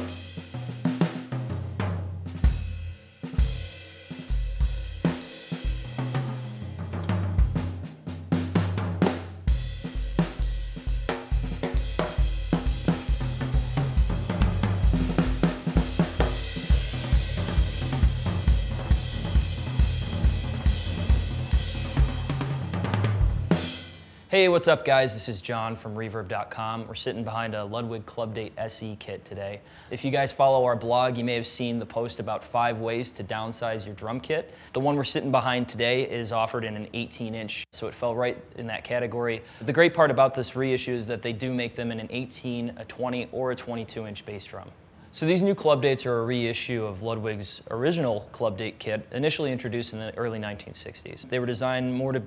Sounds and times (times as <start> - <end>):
Speech: 24.3 - 52.2.